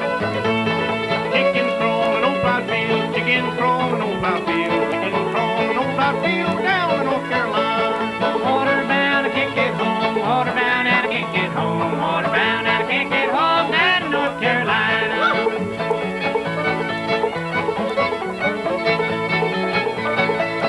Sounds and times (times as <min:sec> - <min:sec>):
Banjo: 0:00.0 - 0:20.6
Bluegrass: 0:00.0 - 0:20.6
Folk music: 0:00.0 - 0:20.6
Song: 0:00.0 - 0:20.6
Singing: 0:01.3 - 0:15.5.